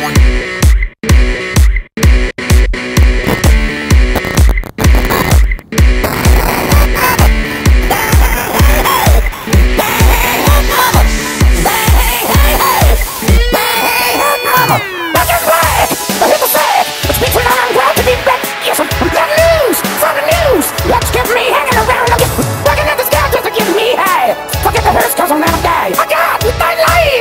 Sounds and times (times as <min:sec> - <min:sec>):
Music: 0:00.0 - 0:27.2.